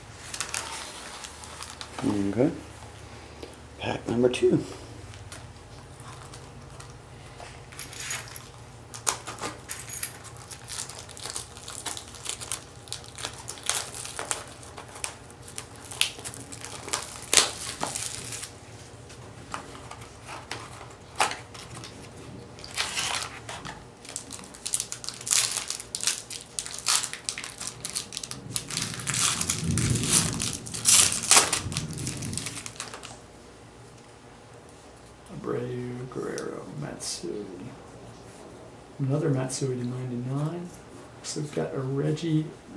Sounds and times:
Inside, small room: 0:00.0 - 0:42.7.

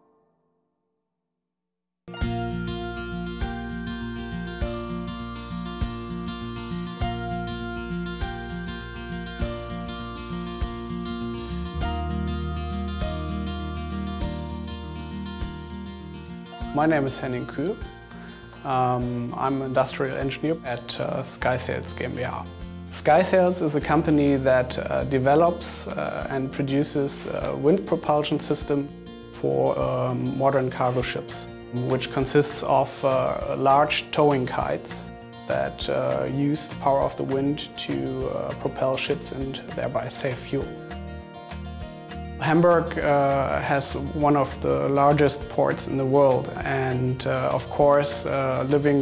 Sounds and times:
Music: 0:02.1 - 0:49.0
Speech: 0:16.7 - 0:17.8, 0:18.6 - 0:40.8, 0:42.4 - 0:49.0.

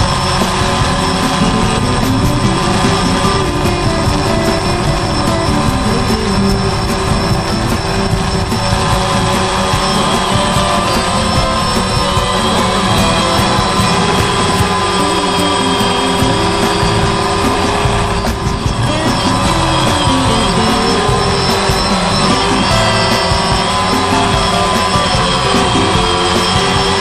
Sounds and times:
Music: 0:00.0 - 0:27.0.

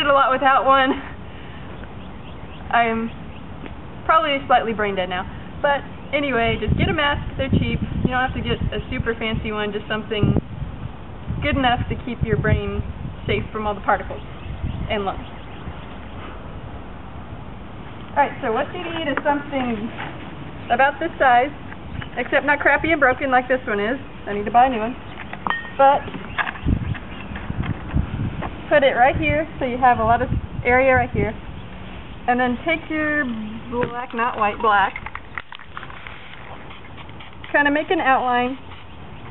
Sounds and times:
Speech: 0:02.7 - 0:03.1, 0:04.1 - 0:10.4, 0:11.4 - 0:14.2, 0:14.9 - 0:15.2, 0:18.2 - 0:20.0, 0:20.7 - 0:21.6, 0:22.2 - 0:25.0, 0:25.8 - 0:26.1, 0:28.7 - 0:31.4, 0:32.3 - 0:34.9, 0:37.5 - 0:38.6.

